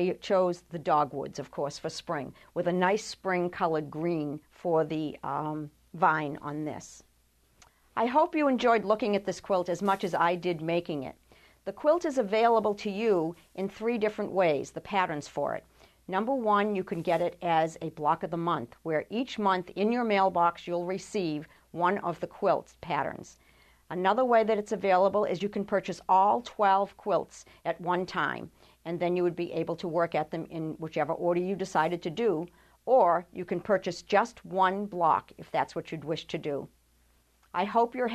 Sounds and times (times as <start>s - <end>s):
Speech: 0.0s - 7.1s, 8.0s - 36.7s, 37.5s - 38.1s
Inside, small room: 0.0s - 38.1s.